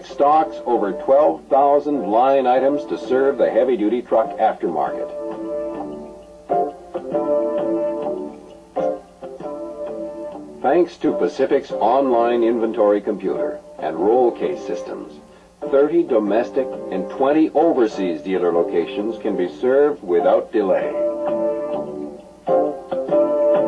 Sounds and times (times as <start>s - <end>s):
Speech: 0.0s - 5.2s, 10.6s - 21.0s
Music: 0.0s - 23.6s.